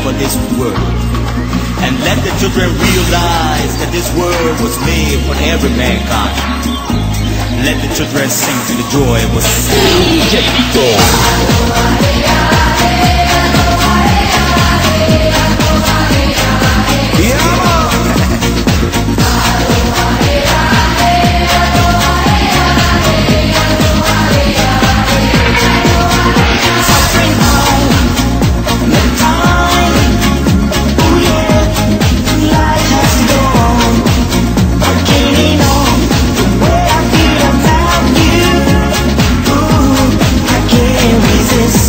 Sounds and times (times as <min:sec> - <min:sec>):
Techno: 0:00.0 - 0:41.8.